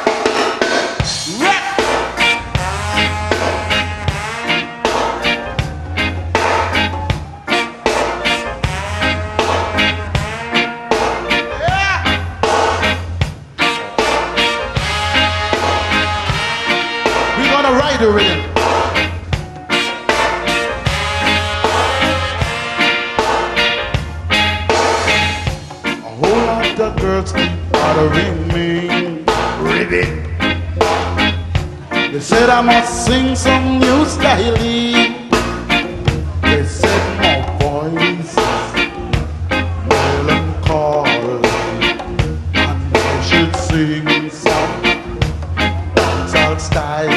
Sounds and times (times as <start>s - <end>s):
Music: 0.0s - 47.1s.